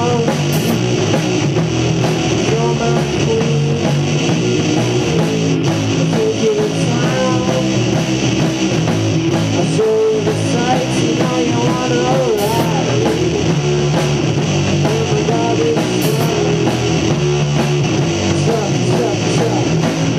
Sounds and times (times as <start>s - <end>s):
Music: 0.0s - 20.1s.